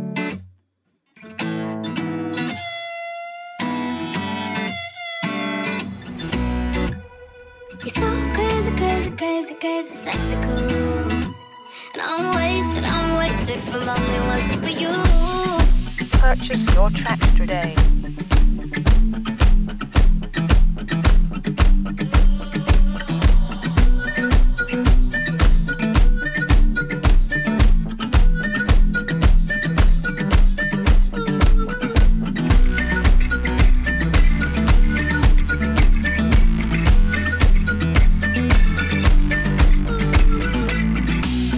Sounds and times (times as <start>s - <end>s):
Music: 0.0s - 0.5s, 1.2s - 41.5s.